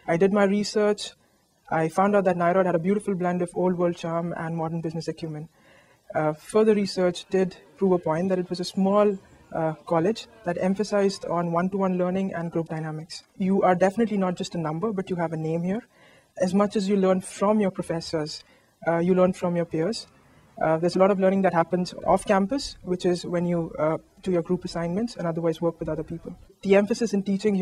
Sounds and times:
Speech: 0.0s - 5.5s, 6.1s - 27.6s.

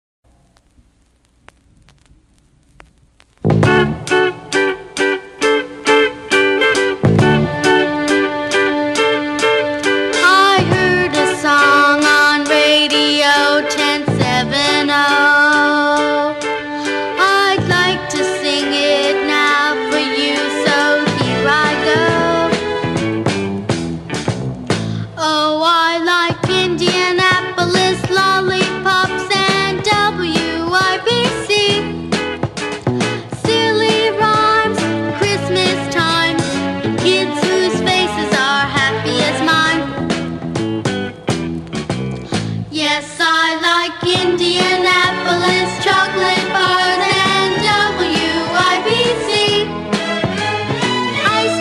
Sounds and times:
Blues: 0.3s - 51.6s.

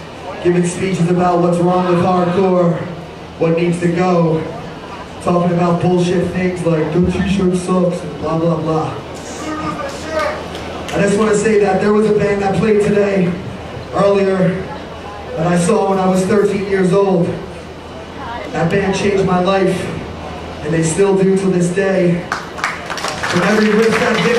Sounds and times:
Speech: 0.2s - 17.5s, 18.2s - 22.3s, 23.3s - 24.3s.

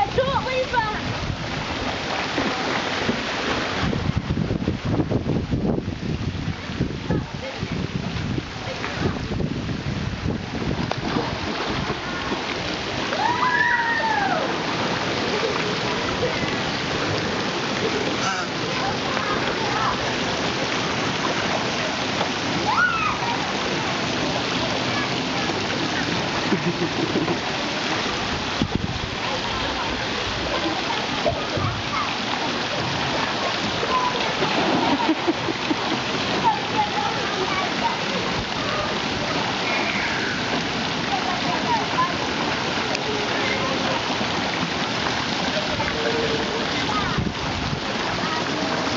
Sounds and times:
Water: 0.0s - 48.9s.

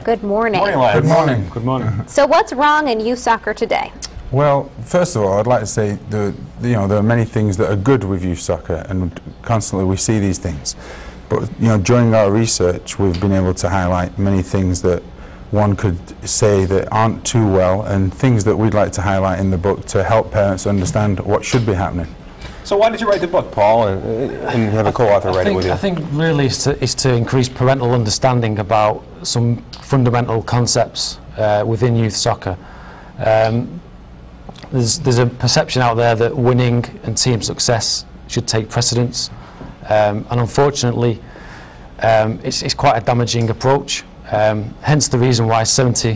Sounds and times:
Speech: 0.1s - 3.1s, 3.7s - 32.6s, 33.2s - 33.8s, 34.6s - 41.2s, 42.0s - 46.1s.

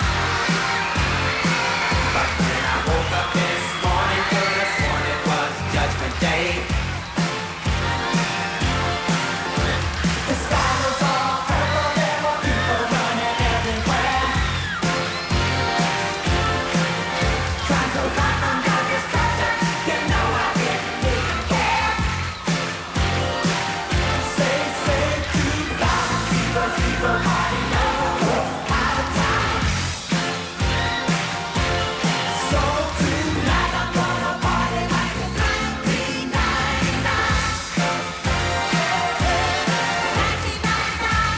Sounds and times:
Music: 0.0s - 41.3s.

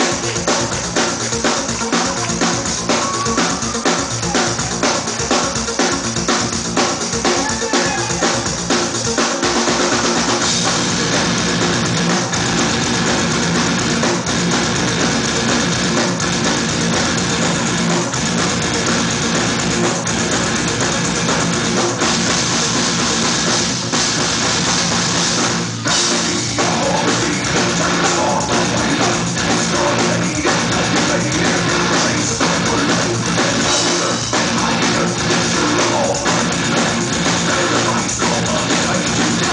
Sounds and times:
Music: 0.0s - 39.5s.

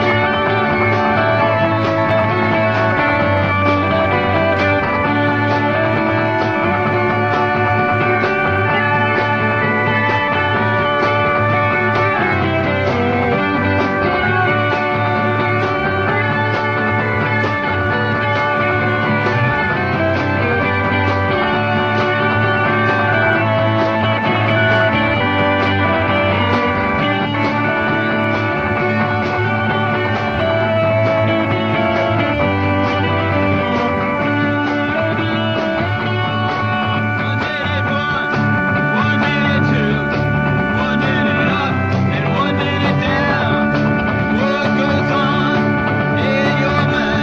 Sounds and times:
Music: 0.0s - 47.2s.

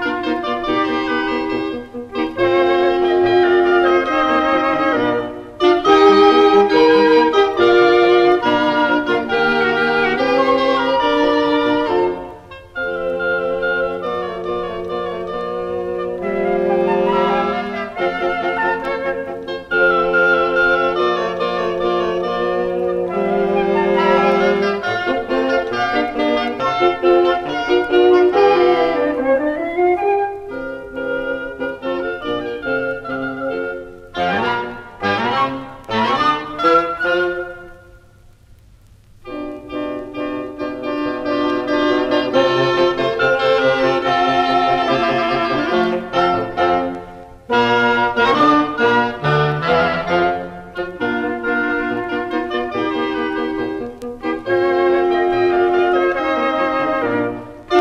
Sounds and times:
Music: 0.0s - 57.8s.

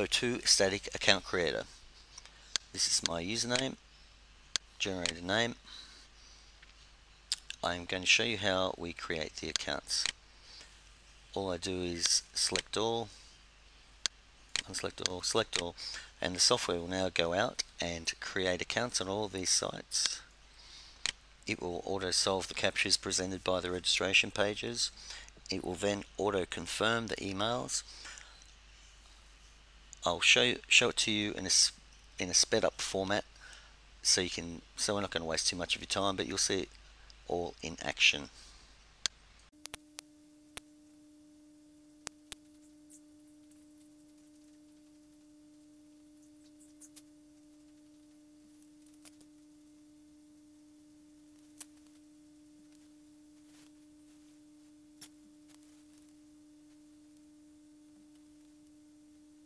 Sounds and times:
Speech: 0.0s - 1.7s, 2.7s - 3.8s, 4.8s - 5.6s, 7.6s - 10.2s, 11.4s - 13.2s, 14.6s - 20.3s, 21.5s - 27.9s, 30.0s - 33.3s, 34.0s - 36.7s, 37.3s - 38.4s.

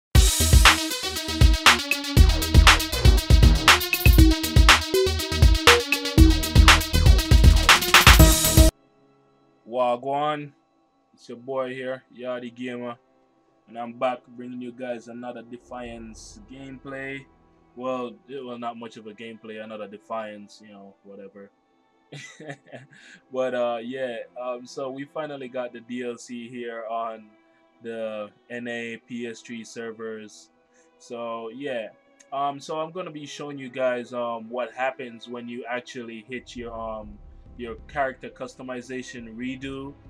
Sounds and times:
Drum machine: 0.2s - 8.7s.

